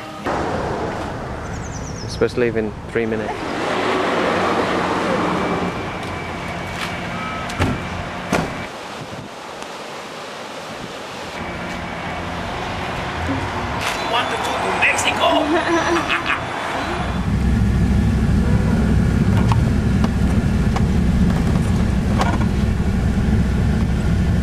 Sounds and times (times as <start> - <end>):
Outside, urban or manmade: 0.0 - 24.4.